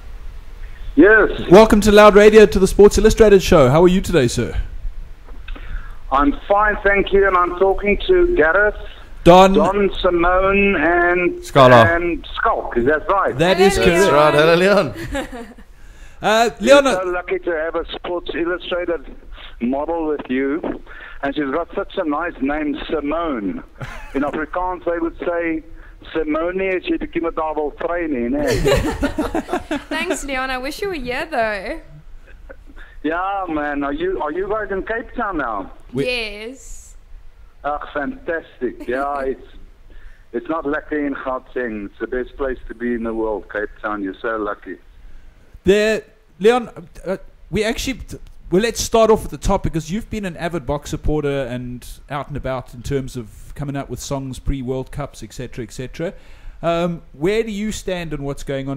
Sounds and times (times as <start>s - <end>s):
Speech: 1.0s - 4.7s, 6.1s - 15.5s, 16.2s - 31.8s, 33.0s - 36.9s, 37.7s - 39.6s, 40.4s - 44.8s, 45.7s - 58.7s.